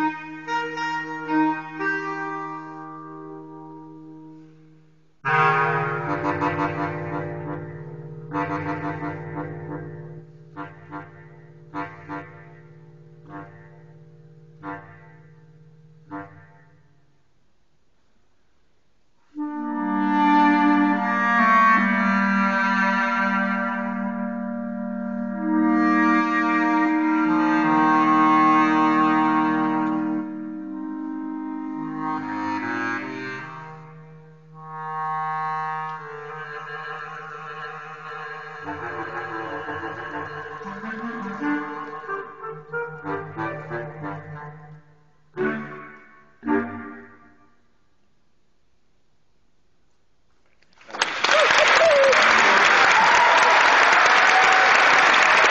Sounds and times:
Musical instrument: 0:05.2 - 0:17.0, 0:19.6 - 0:47.6.

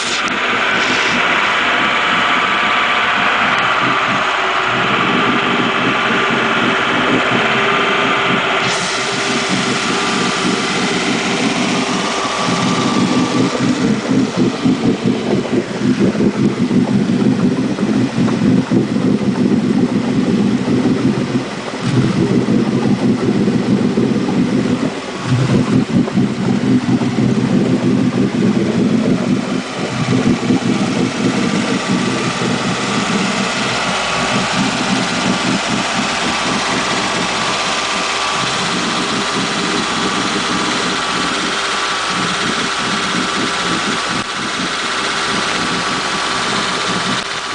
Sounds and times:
Boat, Water vehicle: 0:00.0 - 0:47.5
Heavy engine (low frequency): 0:00.0 - 0:47.5
Vibration: 0:00.0 - 0:47.5.

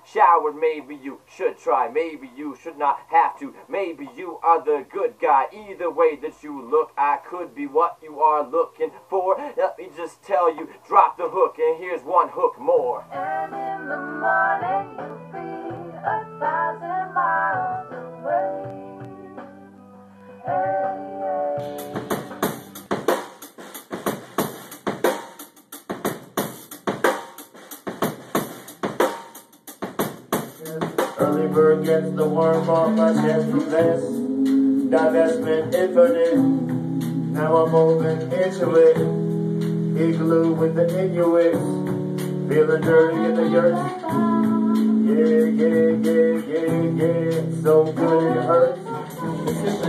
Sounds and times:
Inside, small room: 0:00.0 - 0:49.8
Music: 0:12.4 - 0:49.8.

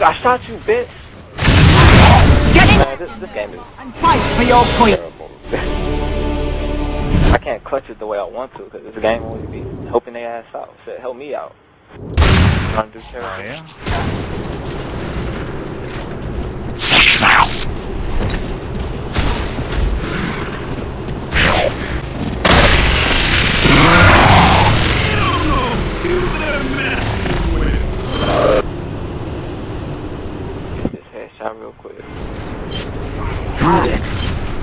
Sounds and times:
Music: 0:03.8 - 0:07.4
Speech: 0:07.3 - 0:11.5, 0:30.9 - 0:32.0.

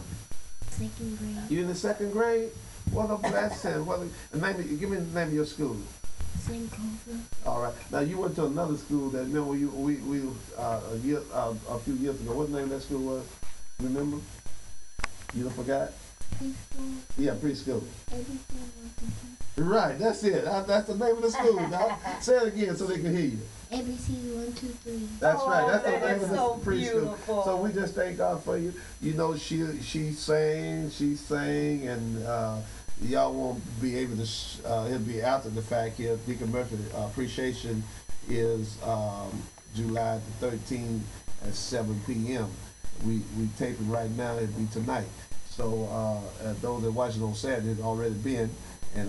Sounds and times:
Speech: 0:00.9 - 0:05.9, 0:06.5 - 0:13.2, 0:15.4 - 0:23.4, 0:24.1 - 0:49.0.

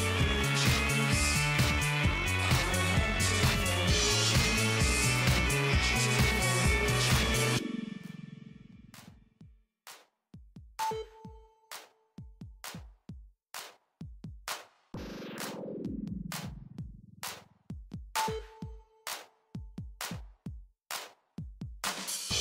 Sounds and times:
Drum machine: 0:00.0 - 0:07.6, 0:09.0 - 0:22.4.

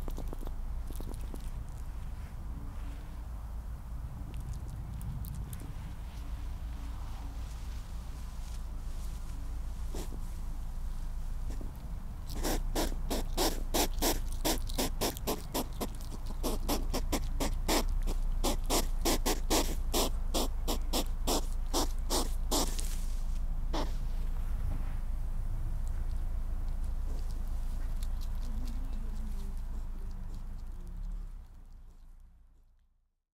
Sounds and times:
Speech: 0:28.5 - 0:31.1.

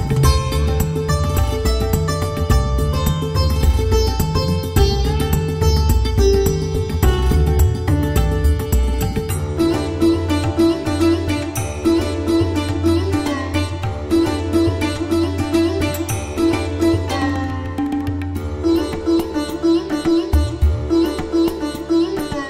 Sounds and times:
Sitar: 0:00.0 - 0:22.5.

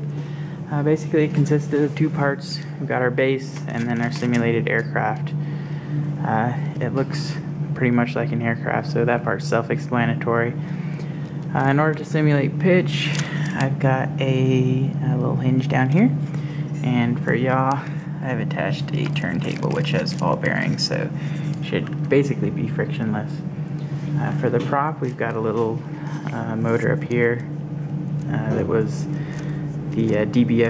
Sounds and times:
Speech: 0:00.7 - 0:05.4, 0:06.2 - 0:10.6, 0:11.5 - 0:16.2, 0:16.8 - 0:23.4, 0:24.2 - 0:27.5, 0:28.2 - 0:29.2, 0:29.9 - 0:30.6.

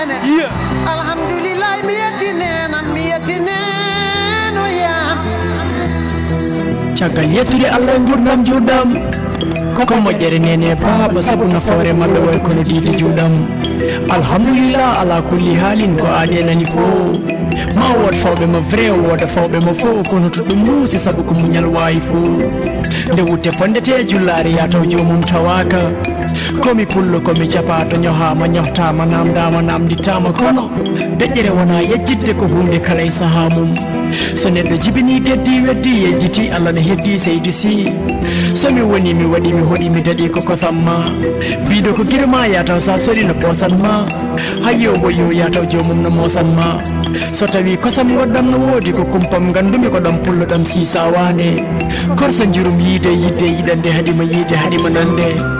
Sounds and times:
Music: 0:00.0 - 0:55.5.

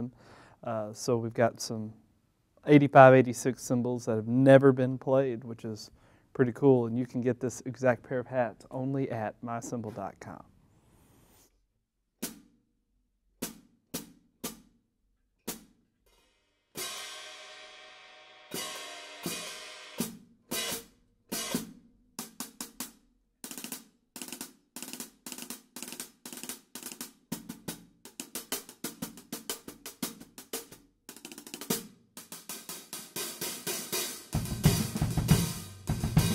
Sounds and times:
Speech: 0:00.0 - 0:02.0, 0:02.6 - 0:10.5.

